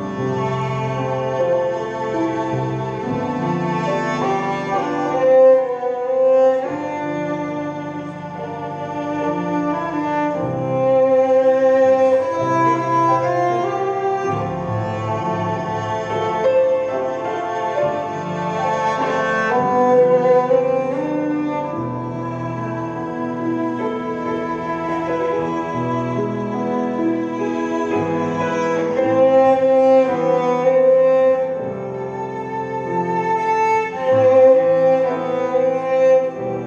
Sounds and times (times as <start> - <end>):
Violin, fiddle: 0.0 - 36.6.